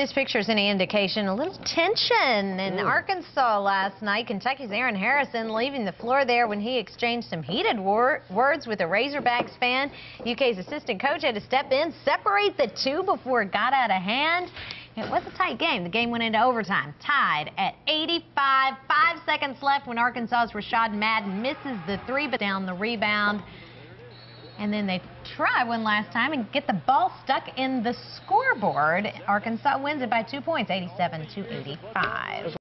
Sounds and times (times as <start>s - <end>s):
Speech: 0.0s - 23.4s.